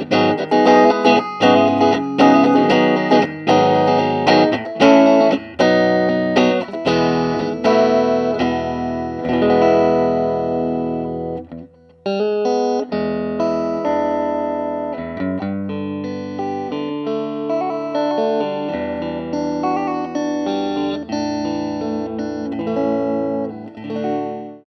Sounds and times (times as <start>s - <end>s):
Guitar: 0.0s - 24.7s
Inside, small room: 0.0s - 24.7s.